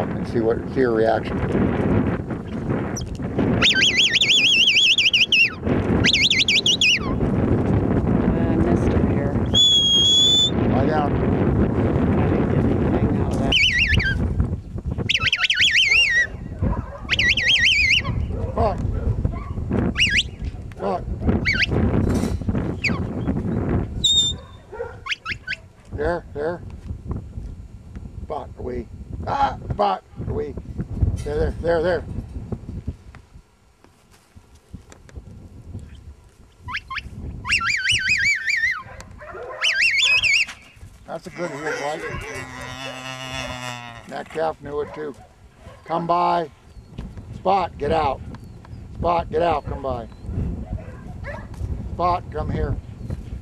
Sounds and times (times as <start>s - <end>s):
Dog: 15.4s - 17.3s, 18.0s - 19.6s, 24.3s - 25.9s, 38.5s - 40.4s, 41.4s - 43.0s, 44.8s - 46.0s, 50.6s - 51.6s
Speech: 18.6s - 18.8s, 20.8s - 21.0s, 31.2s - 32.1s, 41.1s - 42.6s, 44.1s - 45.2s, 45.9s - 46.5s, 47.4s - 48.2s, 49.0s - 50.1s, 52.0s - 52.8s
Livestock, farm animals, working animals: 38.6s - 45.2s.